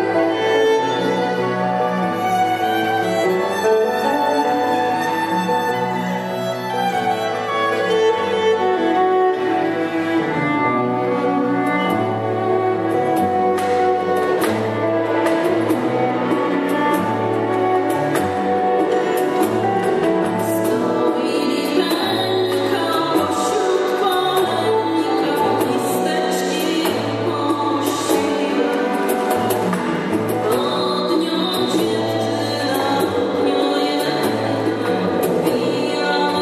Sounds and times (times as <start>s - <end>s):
Orchestra: 0.0s - 36.4s.